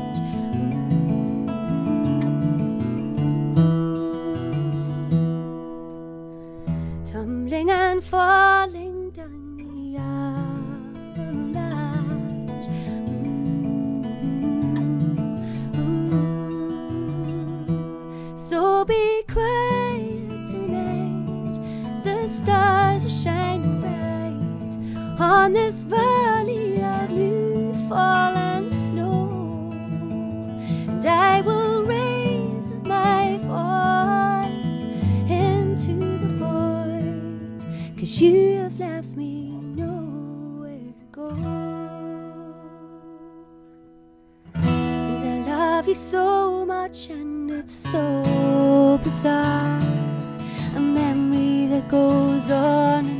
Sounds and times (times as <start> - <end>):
Music: 0.0 - 53.1.